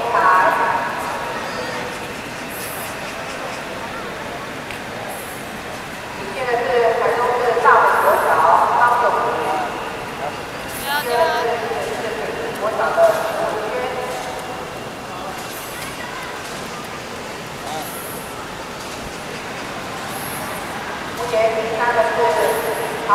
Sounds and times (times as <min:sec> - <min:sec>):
Speech: 0:00.0 - 0:14.5, 0:21.2 - 0:23.1.